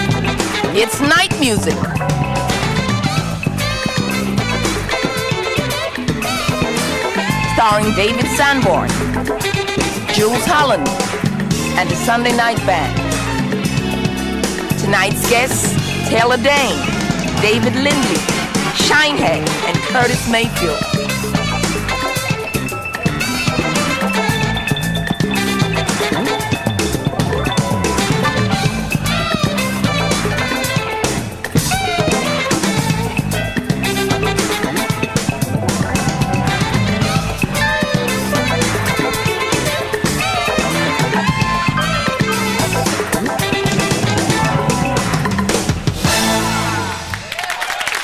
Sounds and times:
Soundtrack music: 0:00.0 - 0:47.4
Dance music: 0:00.0 - 0:48.0
Happy music: 0:00.0 - 0:48.0
Speech: 0:00.8 - 0:01.8, 0:07.5 - 0:09.0, 0:10.1 - 0:10.9, 0:11.8 - 0:13.0, 0:14.8 - 0:20.9.

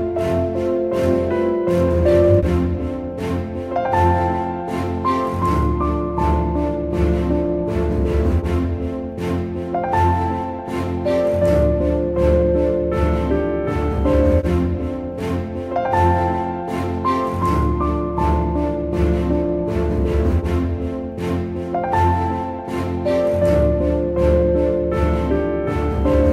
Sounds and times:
Music: 0:00.0 - 0:26.3.

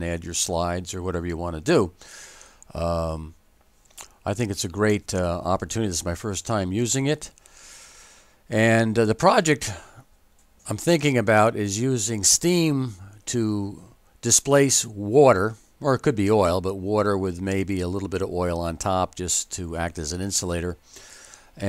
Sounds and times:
Speech: 0:00.0 - 0:02.0, 0:02.7 - 0:03.4, 0:04.2 - 0:07.4, 0:08.5 - 0:10.0, 0:10.6 - 0:20.8.

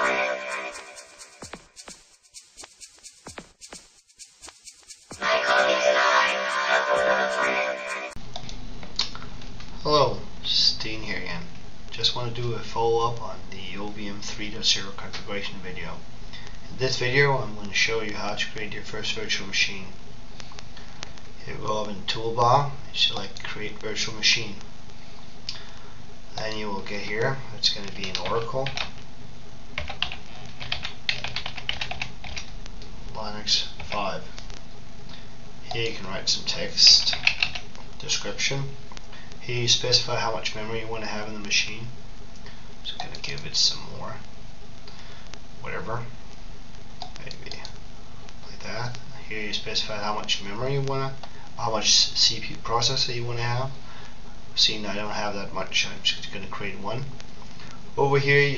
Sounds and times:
Music: 0:00.0 - 0:08.2
Speech: 0:05.2 - 0:07.6, 0:09.8 - 0:16.0, 0:16.7 - 0:20.0, 0:21.4 - 0:24.6, 0:26.3 - 0:28.8, 0:33.1 - 0:34.4, 0:35.6 - 0:37.3, 0:38.0 - 0:38.8, 0:39.4 - 0:42.0, 0:42.8 - 0:44.3, 0:45.6 - 0:46.2, 0:47.2 - 0:47.8, 0:48.4 - 0:53.8, 0:54.6 - 0:57.2, 0:58.0 - 0:58.5.

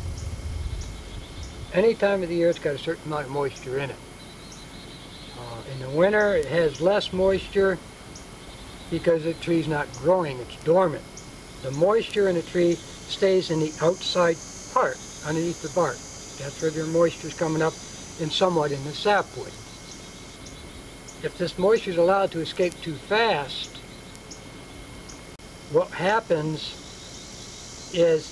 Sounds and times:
Speech: 0:01.7 - 0:04.0, 0:05.4 - 0:07.8, 0:08.9 - 0:11.0, 0:11.6 - 0:19.6, 0:21.2 - 0:23.8, 0:25.7 - 0:26.8, 0:28.0 - 0:28.3.

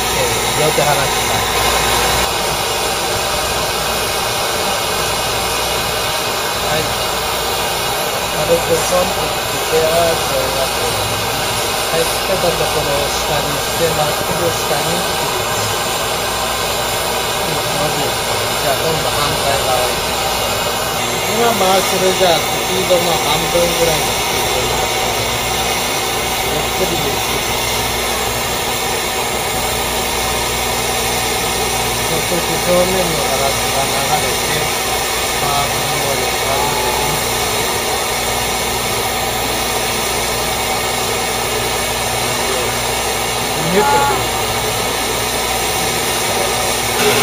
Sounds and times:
Speech: 0:00.0 - 0:01.6, 0:06.6 - 0:07.0, 0:08.3 - 0:15.8, 0:17.4 - 0:20.1, 0:21.0 - 0:25.3, 0:26.4 - 0:27.7, 0:32.0 - 0:34.8, 0:35.4 - 0:37.4, 0:42.2 - 0:42.8, 0:43.5 - 0:44.6.

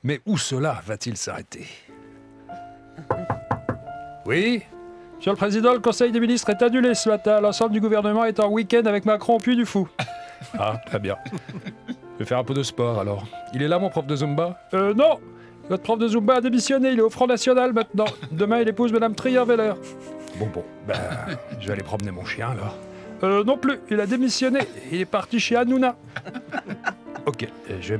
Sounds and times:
Speech: 0:00.0 - 0:01.9, 0:04.3 - 0:09.9, 0:10.6 - 0:11.2, 0:12.2 - 0:19.8, 0:20.4 - 0:26.0, 0:27.3 - 0:27.9
Music: 0:00.4 - 0:27.9.

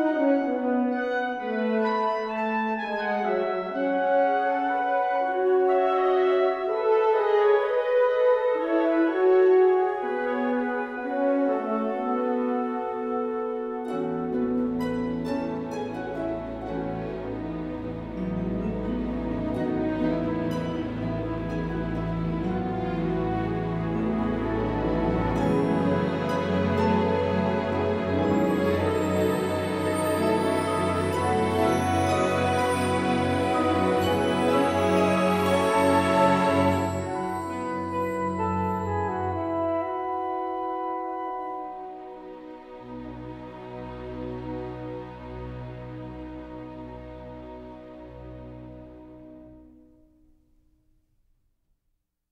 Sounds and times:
Music: 0:00.0 - 0:51.9.

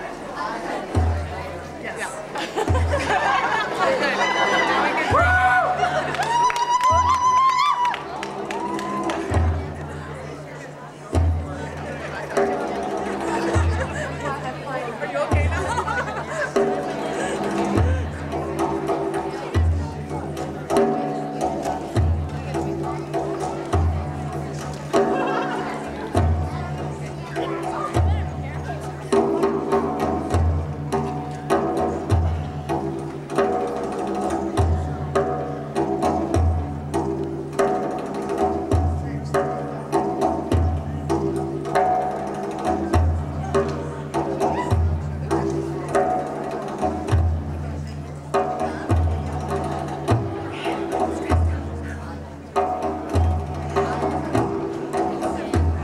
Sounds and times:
Music: 0:00.0 - 0:55.8.

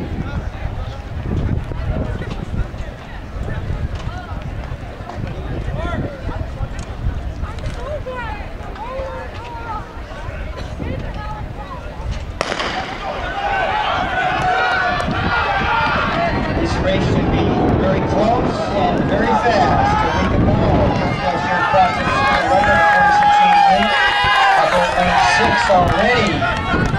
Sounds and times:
Speech: 0:16.1 - 0:24.0, 0:24.6 - 0:26.6.

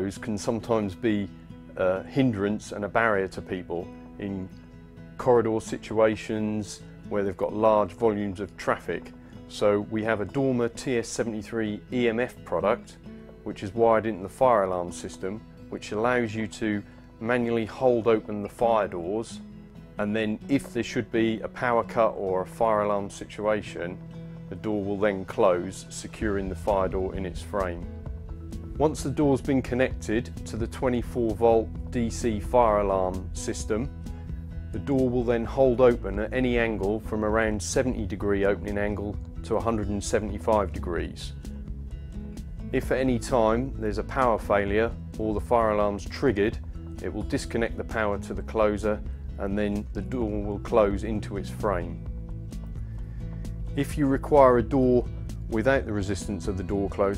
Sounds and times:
Speech: 0:00.0 - 0:04.5, 0:05.2 - 0:19.4, 0:20.0 - 0:27.9, 0:28.8 - 0:33.9, 0:34.8 - 0:41.4, 0:42.7 - 0:52.0, 0:53.8 - 0:57.1
Music: 0:00.0 - 0:57.1.

